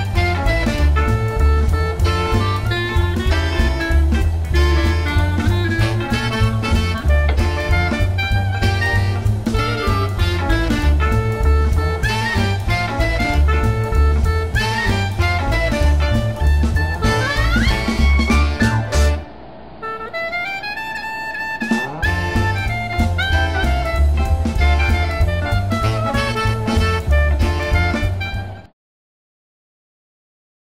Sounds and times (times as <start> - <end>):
Music: 0.0 - 28.8.